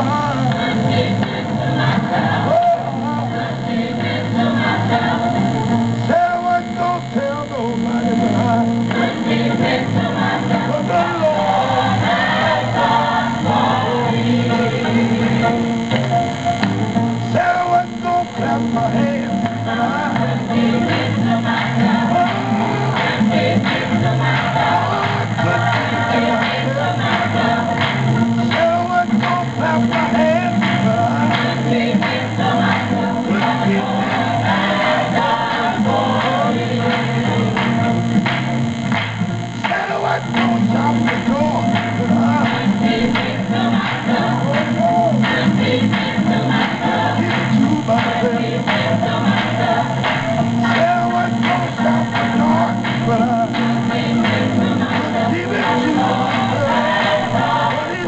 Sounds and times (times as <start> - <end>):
Male singing: 0.0 - 0.6, 6.1 - 8.8, 10.6 - 12.0, 17.3 - 20.2, 28.5 - 31.7, 44.4 - 45.4, 47.1 - 49.0, 50.6 - 58.0
Choir: 0.0 - 6.8, 7.9 - 15.9, 17.3 - 37.9, 39.6 - 58.0.